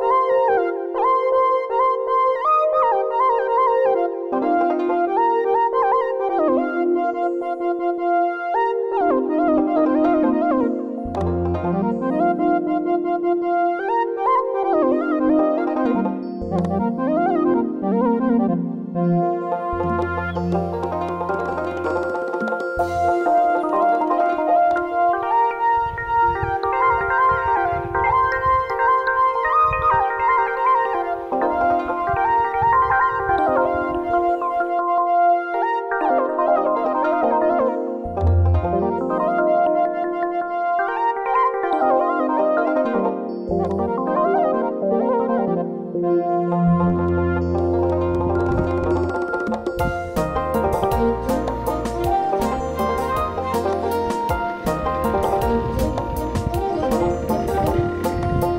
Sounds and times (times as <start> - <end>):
Music: 0.0 - 58.5.